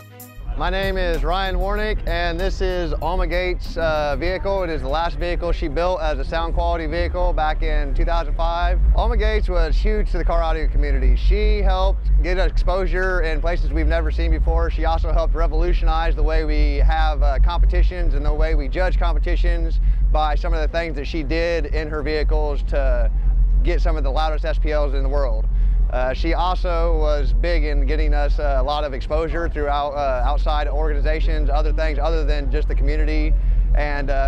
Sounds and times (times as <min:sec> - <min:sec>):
Speech: 0:00.6 - 0:34.2.